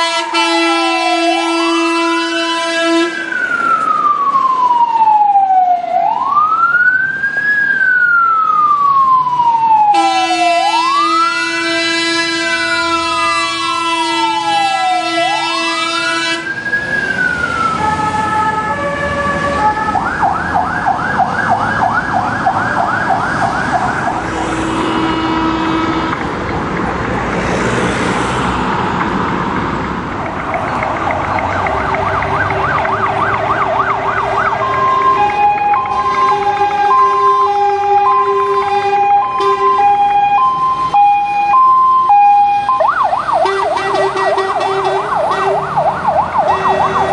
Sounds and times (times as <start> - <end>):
Police car (siren): 0.0 - 25.6, 30.0 - 47.1.